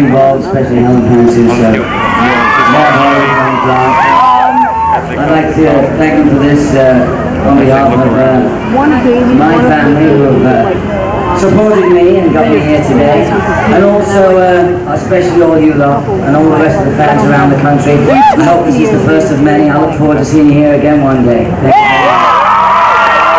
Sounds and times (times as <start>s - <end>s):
Male speech, man speaking: 0.0s - 4.4s, 5.1s - 10.8s, 11.4s - 22.2s.